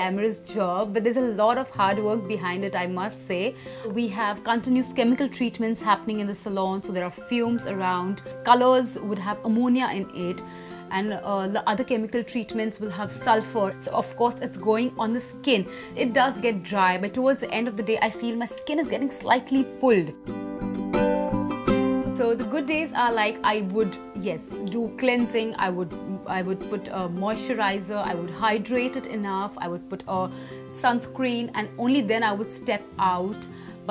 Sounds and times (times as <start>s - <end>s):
Speech: 0.0s - 20.2s, 22.2s - 33.4s
Music: 0.0s - 33.9s.